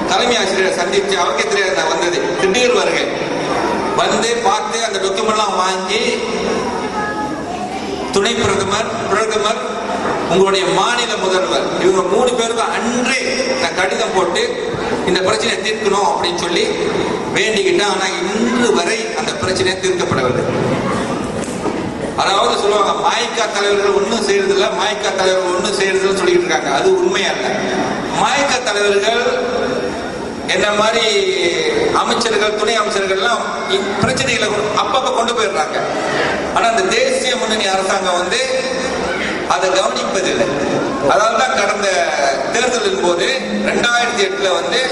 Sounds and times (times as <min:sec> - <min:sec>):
Male speech, man speaking: 0:00.0 - 0:03.2, 0:04.0 - 0:06.5, 0:08.1 - 0:20.5, 0:22.2 - 0:29.7, 0:30.5 - 0:35.9, 0:36.6 - 0:44.9
Narration, monologue: 0:00.0 - 0:44.9.